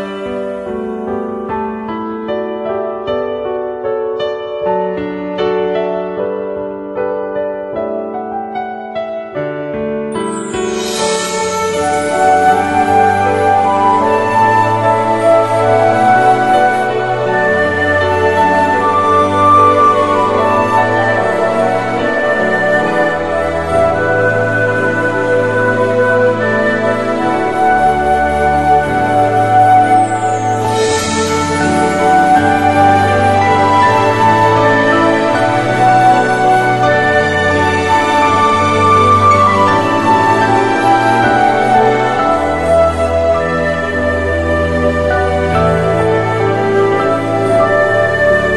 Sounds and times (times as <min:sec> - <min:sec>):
Music: 0:00.0 - 0:48.5.